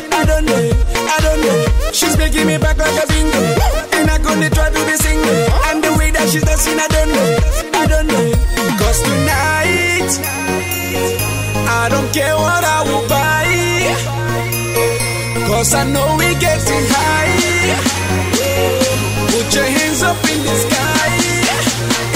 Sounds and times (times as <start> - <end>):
Music: 0.0 - 22.1.